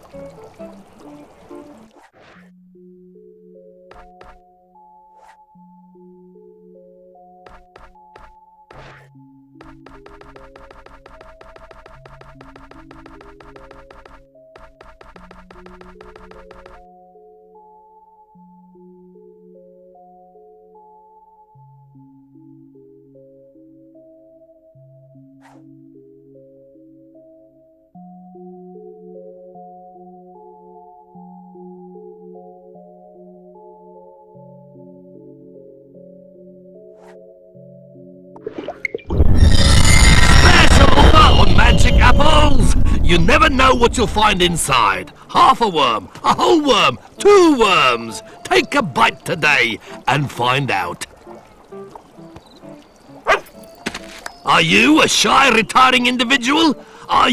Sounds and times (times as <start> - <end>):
Music: 0.0 - 39.0, 41.0 - 57.3.